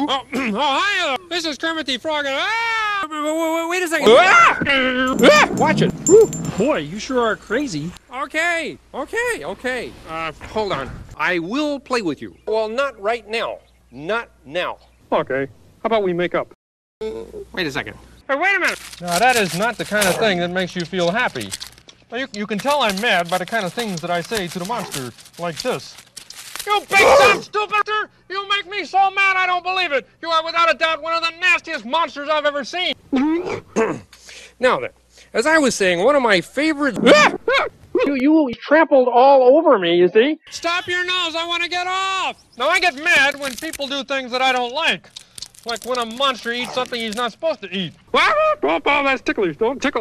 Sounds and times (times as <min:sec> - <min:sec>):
Speech: 0:00.0 - 0:05.9, 0:06.6 - 0:26.0, 0:26.7 - 0:34.0, 0:34.6 - 0:45.0, 0:45.7 - 0:50.0.